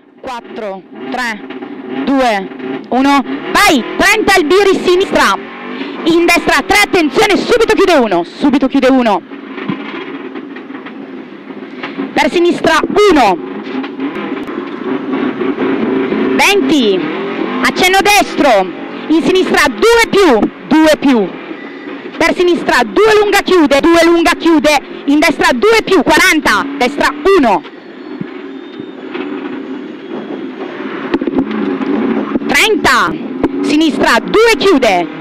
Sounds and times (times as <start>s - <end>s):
Car: 0.0s - 35.2s
Speech: 0.2s - 1.4s, 2.1s - 5.4s, 6.0s - 9.2s, 12.2s - 13.4s, 16.4s - 17.0s, 17.6s - 21.3s, 22.2s - 27.6s, 32.5s - 35.1s.